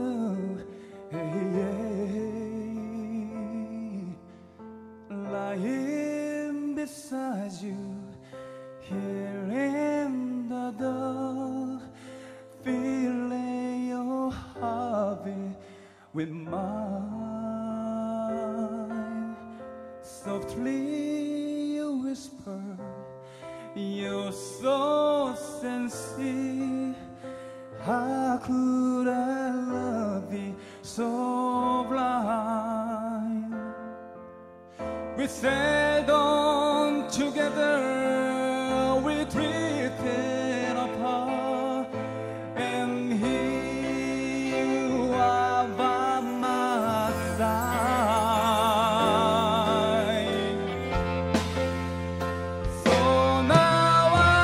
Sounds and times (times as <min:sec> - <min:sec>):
Male singing: 0:00.0 - 0:04.4, 0:05.1 - 0:23.0, 0:23.6 - 0:34.0, 0:35.2 - 0:51.4, 0:52.6 - 0:54.4
Music: 0:00.0 - 0:54.4.